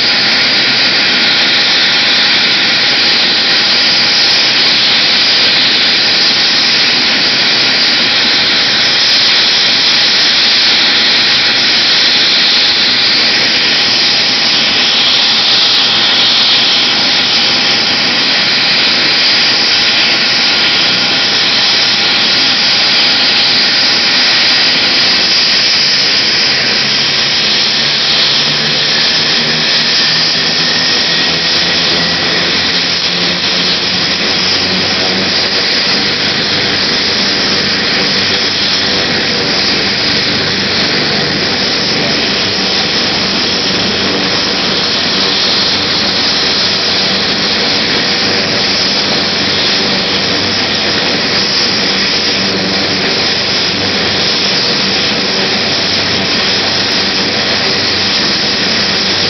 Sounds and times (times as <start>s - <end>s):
Helicopter: 0.0s - 59.3s.